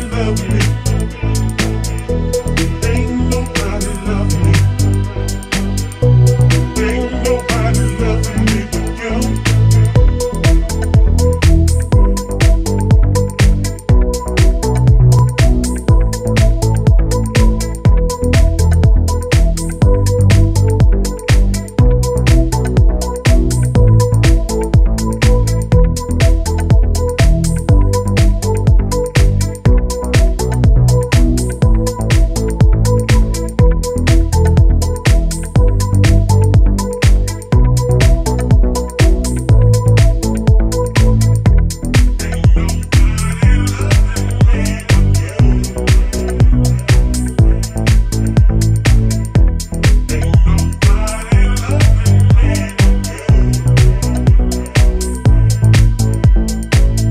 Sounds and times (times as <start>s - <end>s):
Music: 0.0s - 57.1s.